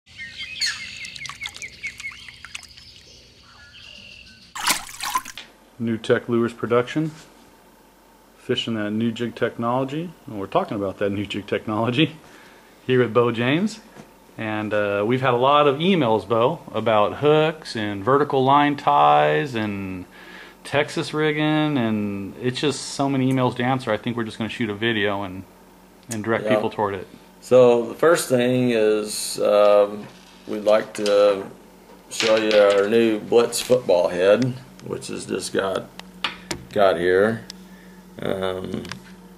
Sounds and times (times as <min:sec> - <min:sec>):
Chirp, tweet: 0:00.1 - 0:04.6.